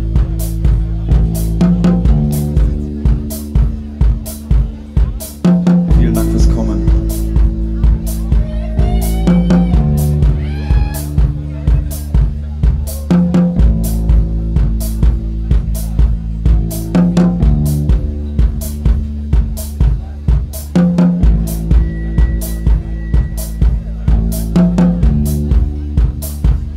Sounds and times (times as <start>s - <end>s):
Inside, public space: 0.0s - 26.7s
Music: 0.0s - 26.7s.